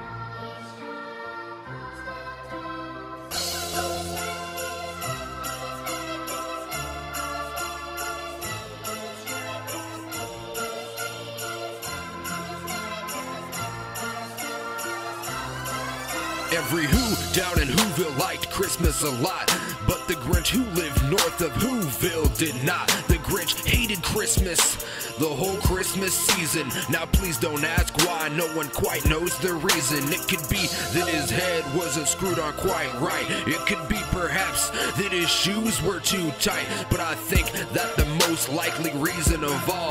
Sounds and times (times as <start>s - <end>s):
Jingle bell: 2.7s - 39.9s.